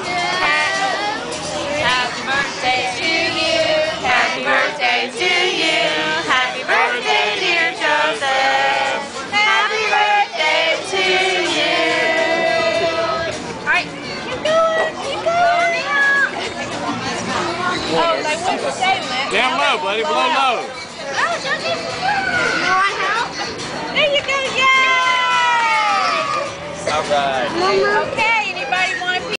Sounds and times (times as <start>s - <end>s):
Music: 0.0s - 29.3s.